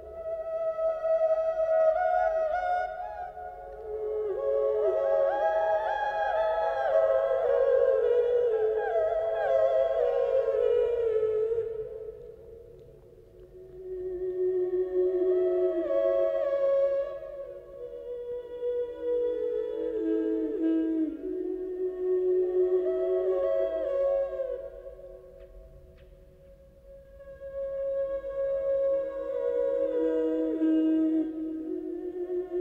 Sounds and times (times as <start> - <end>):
Music: 0.0 - 32.6.